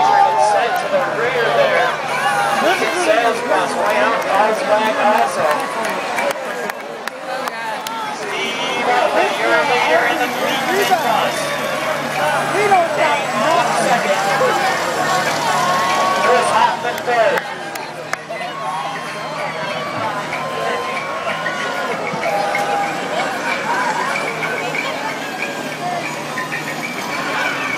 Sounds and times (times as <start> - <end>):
Bus: 0.0 - 27.7
Speech: 0.0 - 27.7.